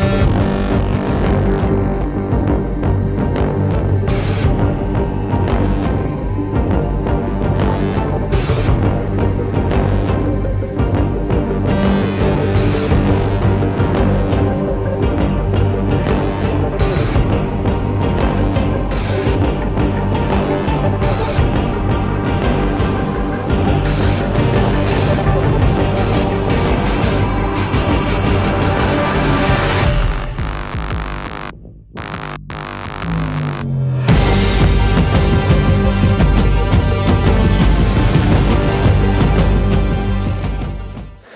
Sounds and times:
Music: 0:00.0 - 0:41.3.

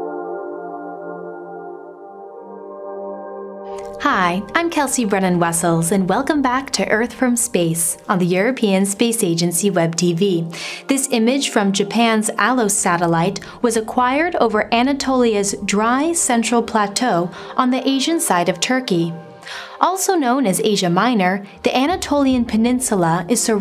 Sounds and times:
Music: 0:00.0 - 0:23.6
Speech: 0:04.0 - 0:19.2, 0:19.8 - 0:23.6.

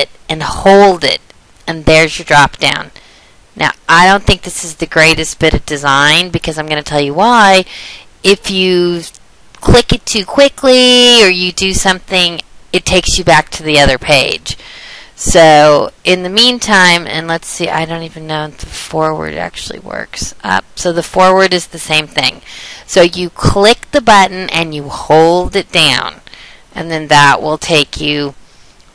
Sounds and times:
Speech: 0:00.0 - 0:03.0, 0:03.6 - 0:14.6, 0:15.2 - 0:26.2, 0:26.8 - 0:28.4.

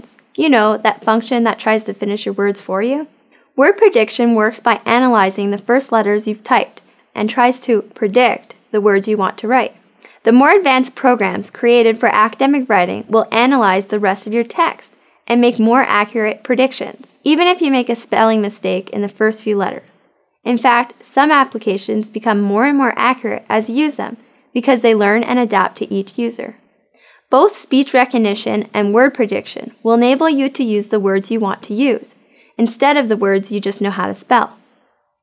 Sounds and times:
Speech: 0:00.0 - 0:26.6, 0:27.4 - 0:34.6.

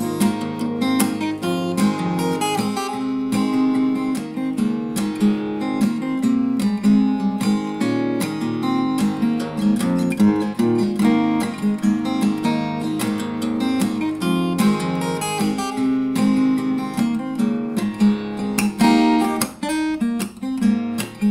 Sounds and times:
Music: 0:00.0 - 0:21.3.

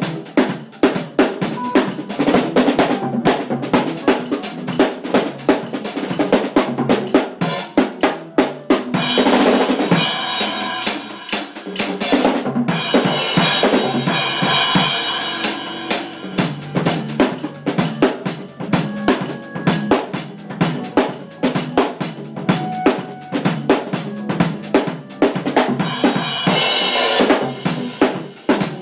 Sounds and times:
Drum kit: 0:00.0 - 0:28.8.

